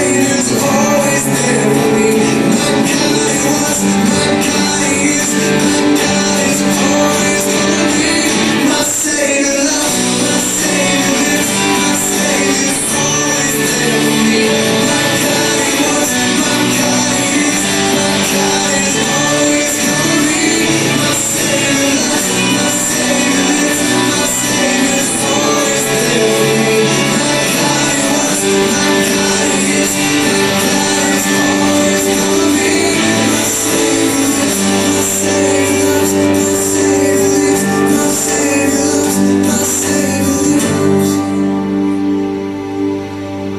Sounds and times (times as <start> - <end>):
Singing: 0.0 - 42.3
Inside, public space: 0.0 - 43.5
Music: 0.0 - 43.5.